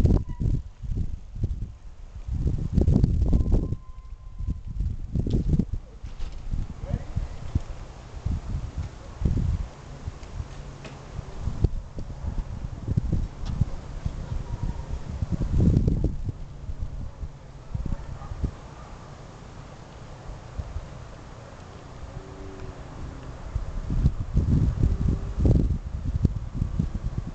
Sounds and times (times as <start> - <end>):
Vehicle: 0.0 - 27.3.